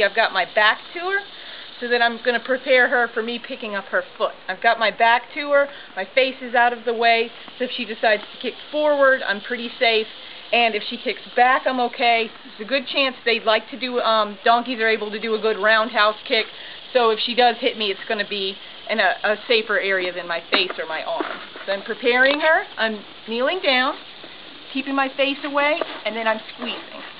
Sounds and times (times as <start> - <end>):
Speech: 0.0 - 24.0, 24.7 - 27.1.